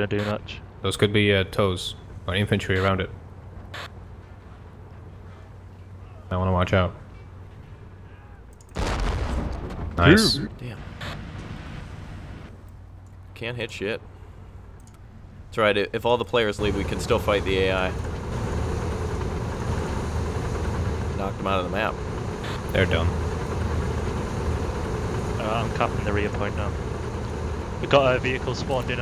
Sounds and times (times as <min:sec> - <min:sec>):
Speech: 0:00.0 - 0:03.1, 0:10.0 - 0:10.8, 0:13.4 - 0:14.0, 0:15.6 - 0:18.0, 0:21.2 - 0:21.9, 0:22.8 - 0:23.1, 0:25.4 - 0:26.8, 0:27.8 - 0:29.0
Vehicle: 0:10.0 - 0:29.0.